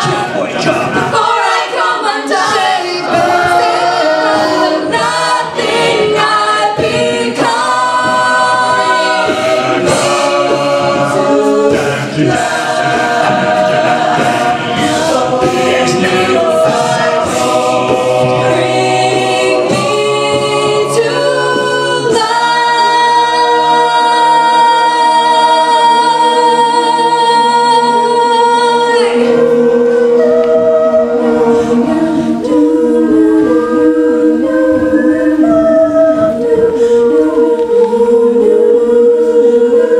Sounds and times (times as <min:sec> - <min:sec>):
A capella: 0:00.0 - 0:39.9
Choir: 0:00.0 - 0:39.9.